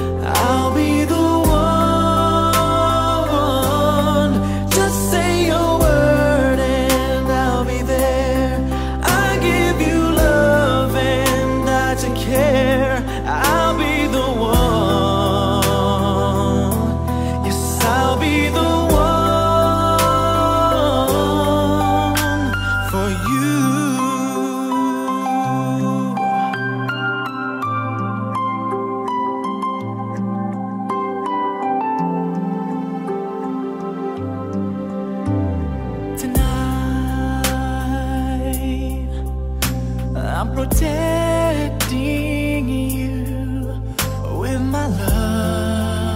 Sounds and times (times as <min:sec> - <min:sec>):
New-age music: 0:00.0 - 0:46.1.